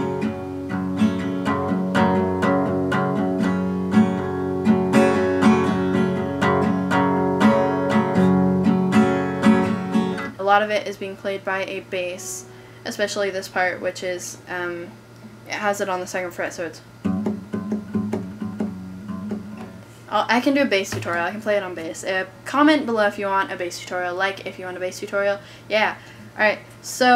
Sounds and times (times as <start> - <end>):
Strum: 0.0 - 10.3, 17.0 - 22.0
Speech: 10.4 - 16.9, 20.1 - 27.1.